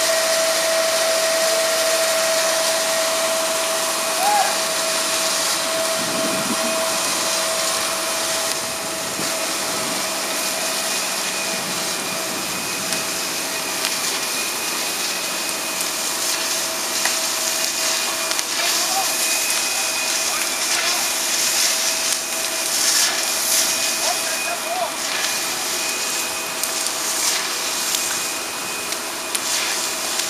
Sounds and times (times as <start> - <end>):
Fire: 0.0 - 30.2.